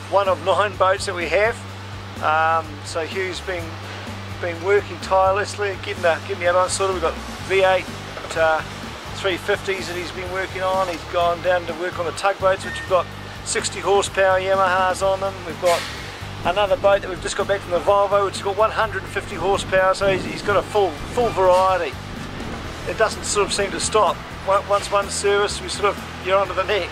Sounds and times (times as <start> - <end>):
Speech: 0.0 - 1.6, 2.2 - 3.8, 4.4 - 8.6, 9.2 - 22.0, 22.9 - 26.9
Music: 0.0 - 26.9.